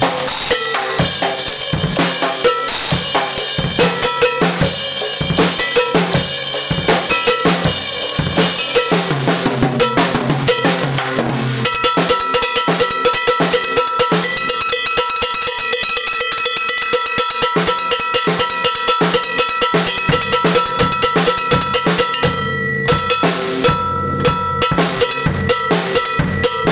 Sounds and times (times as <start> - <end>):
Drum kit: 0.0 - 26.7
Bass drum: 1.0 - 14.6, 18.4 - 26.7.